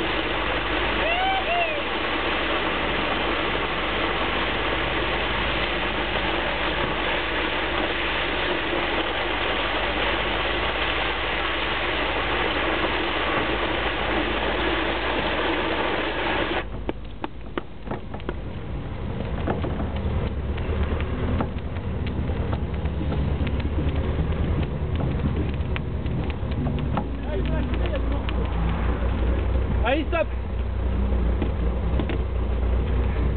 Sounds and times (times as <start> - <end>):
Wind: 0.0 - 33.3.